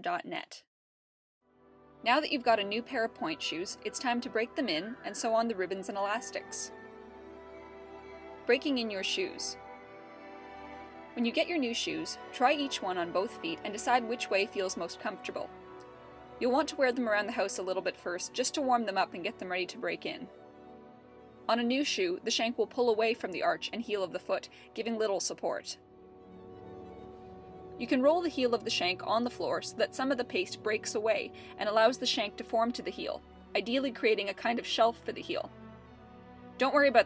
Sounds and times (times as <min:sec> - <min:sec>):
Speech: 0:00.0 - 0:00.7, 0:02.1 - 0:06.7, 0:08.5 - 0:09.6, 0:11.2 - 0:15.5, 0:16.4 - 0:20.3, 0:21.5 - 0:25.8, 0:27.8 - 0:35.5, 0:36.6 - 0:37.0
Music: 0:01.4 - 0:37.0.